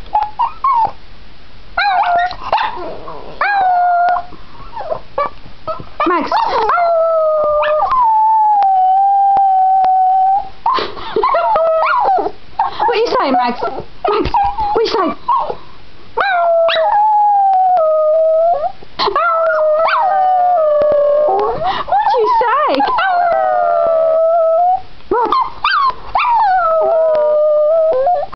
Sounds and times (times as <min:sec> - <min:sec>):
Speech: 0:06.0 - 0:06.7, 0:12.8 - 0:15.2, 0:22.0 - 0:23.0, 0:25.1 - 0:25.4
Howl: 0:06.4 - 0:10.5, 0:16.2 - 0:28.3.